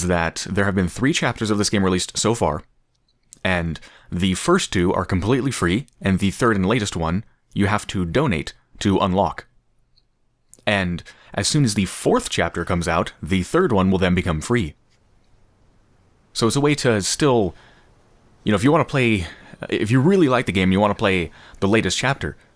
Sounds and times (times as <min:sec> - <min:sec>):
Speech: 0:00.0 - 0:02.7, 0:03.4 - 0:09.5, 0:10.6 - 0:14.8, 0:16.4 - 0:17.6, 0:18.4 - 0:22.5.